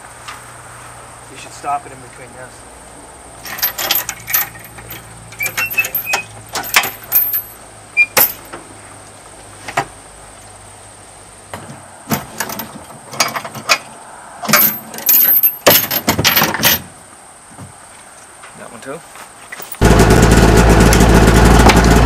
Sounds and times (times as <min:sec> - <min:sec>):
Vehicle: 0:00.0 - 0:22.0.